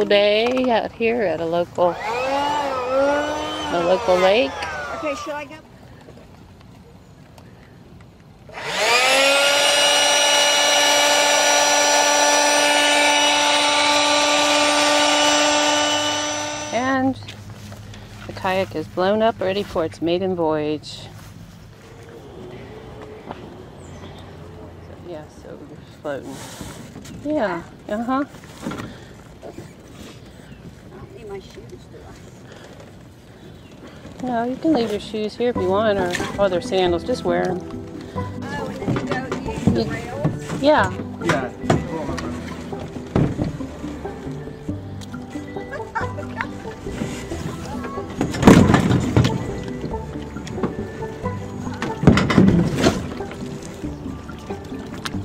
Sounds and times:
Outside, rural or natural: 0.0s - 55.2s.

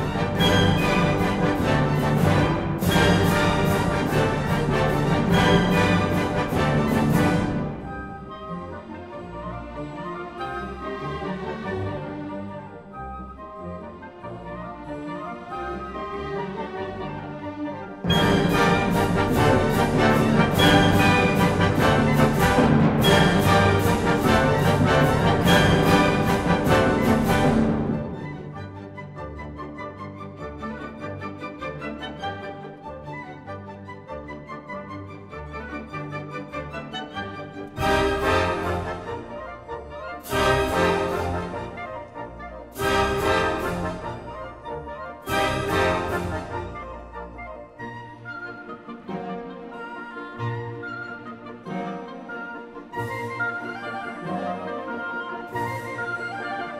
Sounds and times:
Music: 0.0s - 56.7s.

